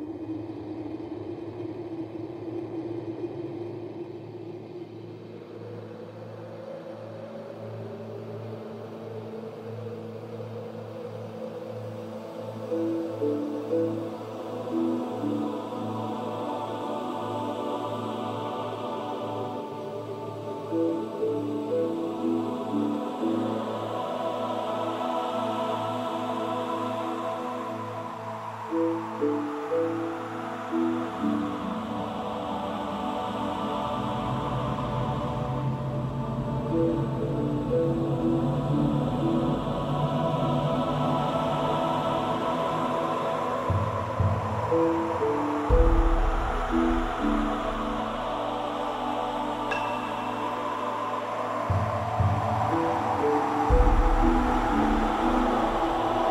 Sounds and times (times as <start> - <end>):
Music: 0.0 - 56.3.